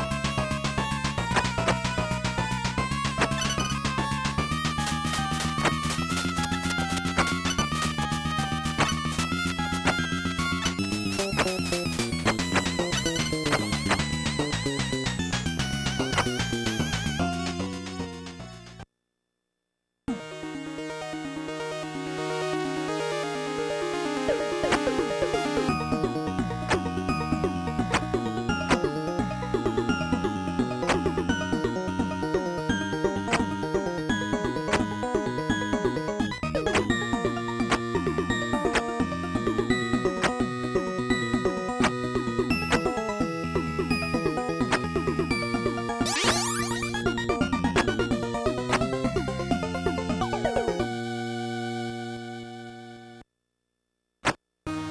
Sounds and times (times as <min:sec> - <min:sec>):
Music: 0:00.0 - 0:18.8, 0:20.1 - 0:53.2, 0:54.7 - 0:54.9.